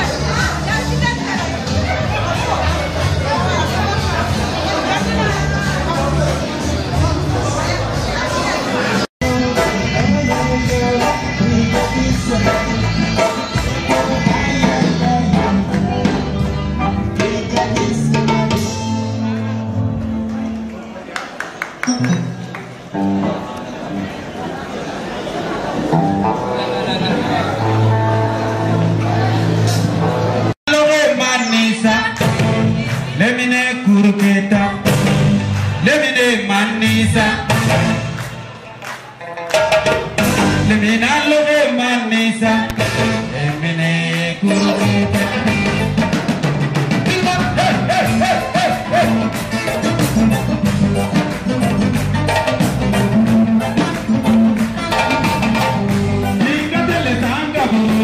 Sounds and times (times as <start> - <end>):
Speech: 0.0 - 9.1
Music: 0.0 - 24.3, 25.8 - 58.0.